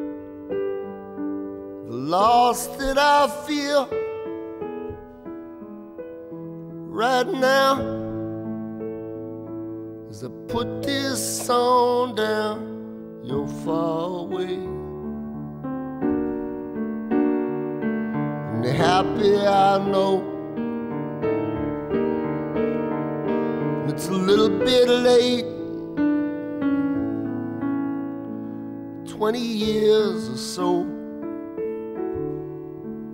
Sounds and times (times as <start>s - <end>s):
Electric piano: 0.0s - 33.1s.